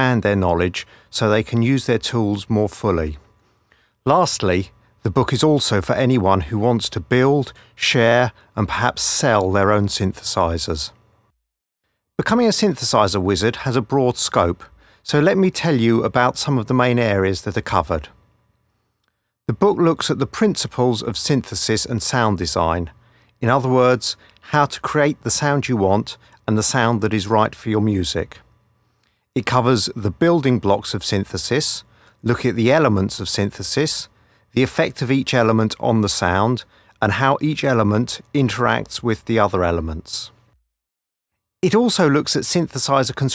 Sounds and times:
Speech: 0.0s - 3.3s, 4.1s - 11.0s, 12.2s - 18.2s, 19.5s - 28.5s, 29.4s - 40.4s, 41.6s - 43.3s.

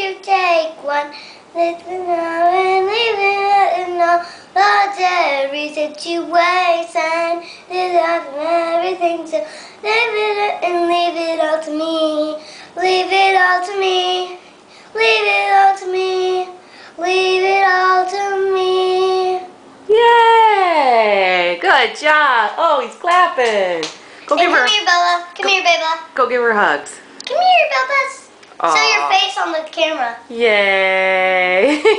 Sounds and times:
Child singing: 0.0s - 19.6s, 28.7s - 30.2s
Speech: 19.9s - 31.8s.

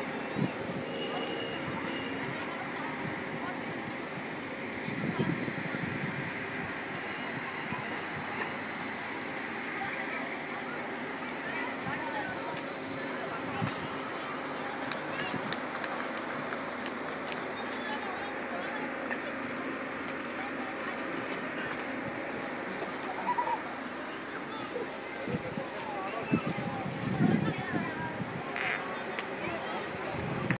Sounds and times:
Speech: 0.0s - 30.5s.

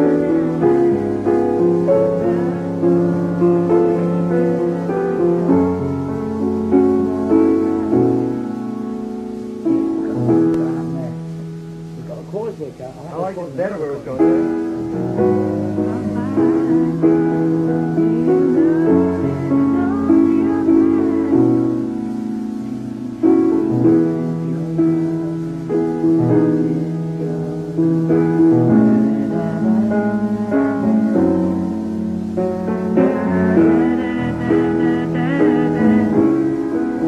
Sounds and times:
Music: 0.0s - 37.0s
Speech: 10.1s - 11.2s, 12.0s - 14.4s.

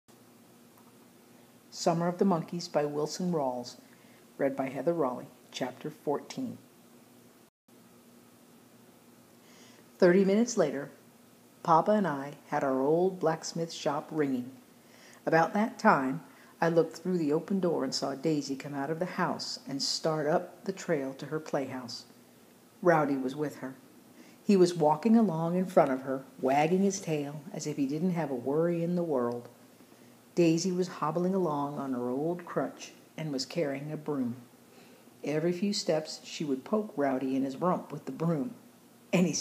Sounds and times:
Inside, small room: 0.1s - 39.4s
Speech: 1.7s - 3.8s, 4.4s - 6.6s, 10.0s - 11.0s, 11.6s - 14.6s, 15.2s - 22.1s, 22.8s - 23.8s, 24.4s - 29.6s, 30.4s - 34.5s, 35.2s - 39.4s.

